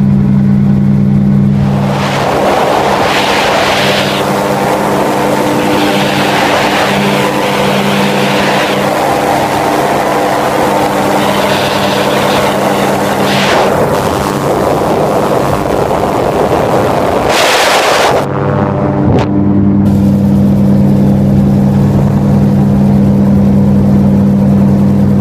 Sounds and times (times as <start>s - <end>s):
Helicopter: 0.0s - 25.2s
Outside, rural or natural: 0.0s - 25.2s.